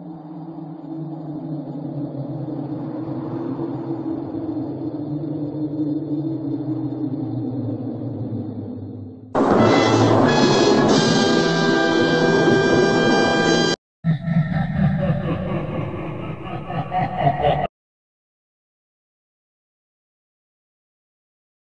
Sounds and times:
Music: 0:09.4 - 0:13.8.

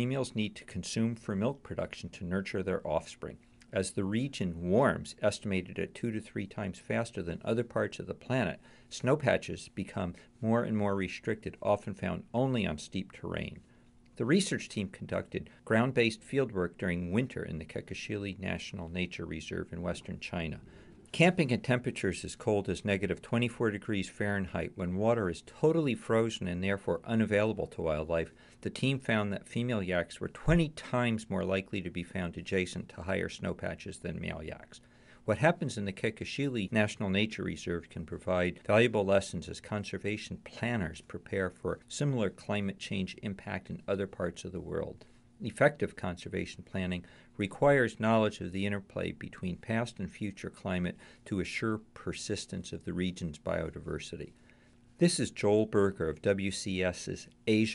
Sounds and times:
Speech: 0:00.0 - 0:54.4, 0:55.0 - 0:57.7.

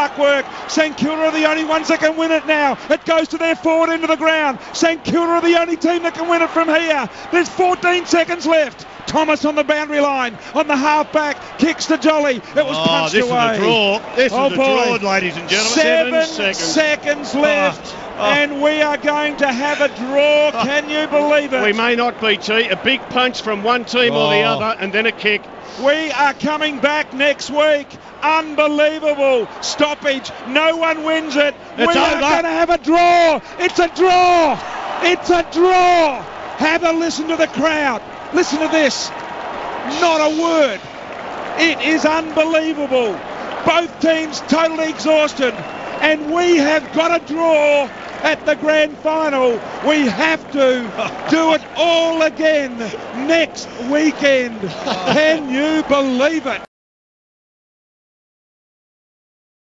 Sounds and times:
Speech: 0:00.0 - 0:39.1, 0:39.9 - 0:40.8, 0:41.6 - 0:56.7.

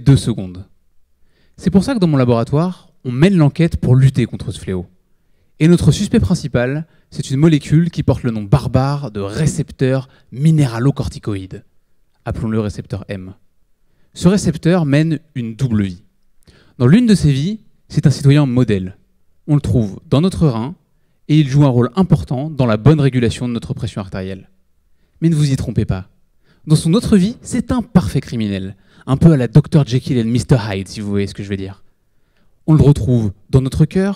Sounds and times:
Speech: 0:00.0 - 0:00.7, 0:01.6 - 0:05.0, 0:05.6 - 0:13.4, 0:14.2 - 0:16.1, 0:16.8 - 0:24.6, 0:25.2 - 0:31.8, 0:32.7 - 0:34.1.

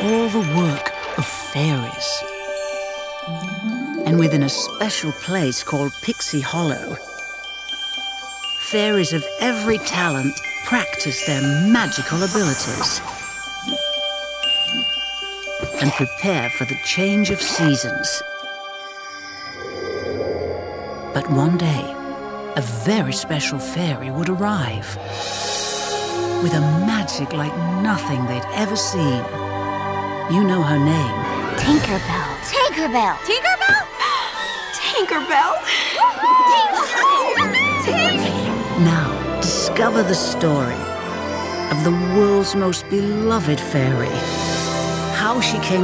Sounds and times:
Speech: 0:00.0 - 0:02.2, 0:04.0 - 0:07.0, 0:08.7 - 0:13.0, 0:15.8 - 0:18.2, 0:21.2 - 0:21.9, 0:22.6 - 0:25.0, 0:26.4 - 0:29.3, 0:30.3 - 0:33.8, 0:36.5 - 0:40.9, 0:41.7 - 0:44.2, 0:45.1 - 0:45.8
Music: 0:00.0 - 0:45.8.

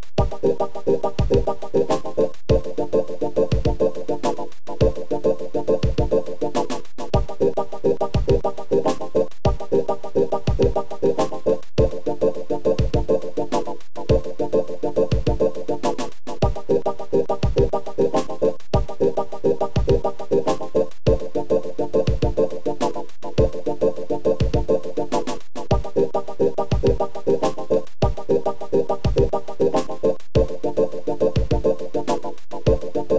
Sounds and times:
Video game music: 0:00.1 - 0:33.1.

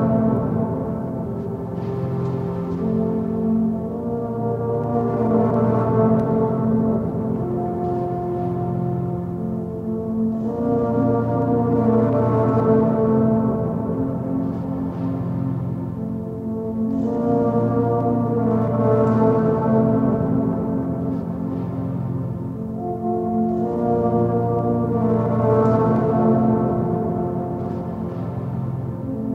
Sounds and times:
Music: 0:00.0 - 0:29.3.

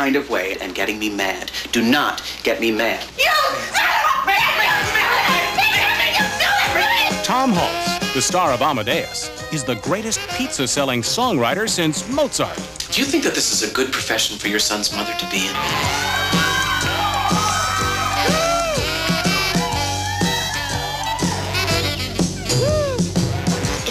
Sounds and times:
Speech: 0:00.0 - 0:15.6
Music: 0:00.0 - 0:23.9.

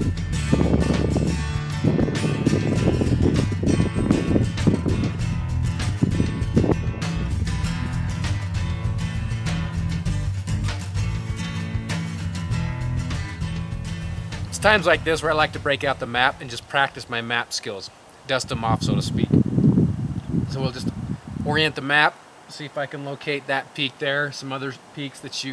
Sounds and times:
Music: 0:00.0 - 0:16.4
Outside, rural or natural: 0:00.0 - 0:25.5
Speech: 0:14.5 - 0:19.4, 0:20.5 - 0:25.5.

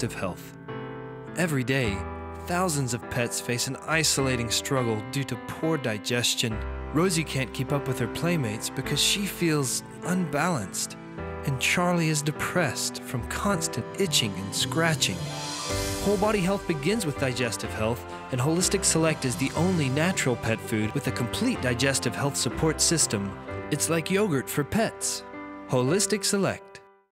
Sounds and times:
Speech: 0:00.0 - 0:00.6, 0:01.4 - 0:15.3, 0:16.0 - 0:26.8
Music: 0:00.0 - 0:27.1.

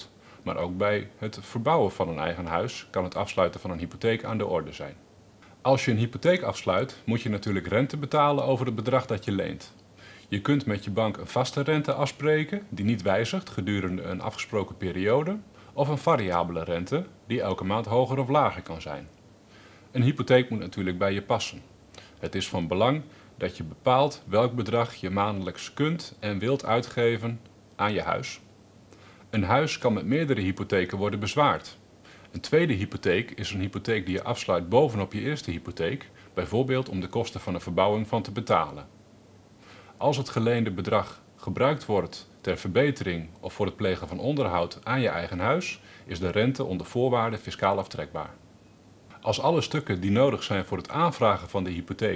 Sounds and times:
Speech: 0:00.0 - 0:05.0, 0:05.6 - 0:19.2, 0:19.9 - 0:28.5, 0:29.3 - 0:38.9, 0:40.0 - 0:48.4, 0:49.1 - 0:52.1.

